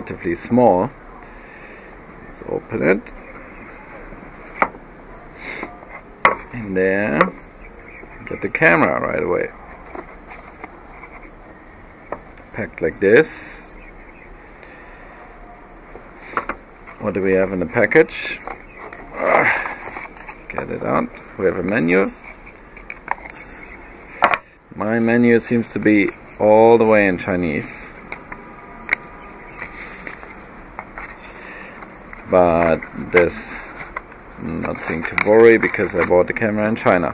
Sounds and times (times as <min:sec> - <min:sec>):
Speech: 0:00.0 - 0:00.9, 0:02.3 - 0:03.2, 0:08.2 - 0:09.5, 0:12.5 - 0:13.7, 0:17.0 - 0:18.4, 0:20.5 - 0:22.2, 0:24.8 - 0:28.0, 0:32.3 - 0:33.7, 0:34.4 - 0:37.1.